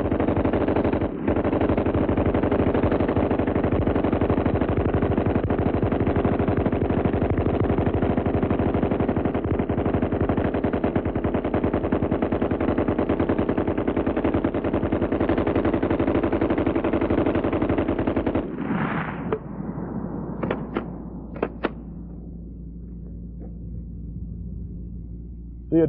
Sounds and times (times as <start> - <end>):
Machine gun: 0.0 - 18.6, 20.4 - 21.8.